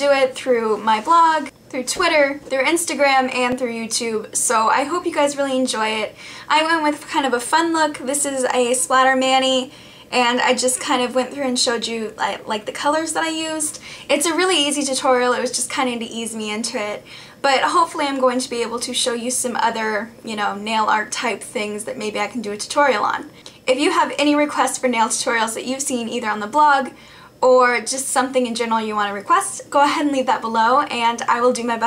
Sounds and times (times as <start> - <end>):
Speech: 0.0 - 31.8.